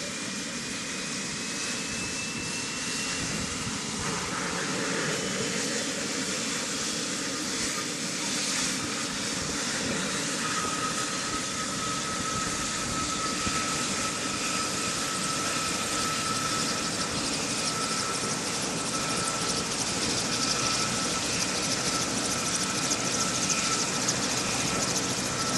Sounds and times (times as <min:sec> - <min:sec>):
Helicopter: 0:00.0 - 0:25.5.